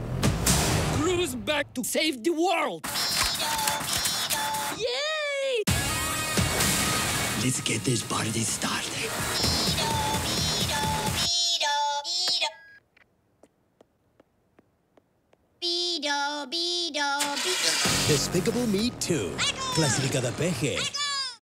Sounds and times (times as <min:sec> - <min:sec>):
Music: 0:00.0 - 0:01.2, 0:05.7 - 0:11.3, 0:17.8 - 0:20.8
Speech: 0:01.0 - 0:03.8, 0:17.4 - 0:21.4.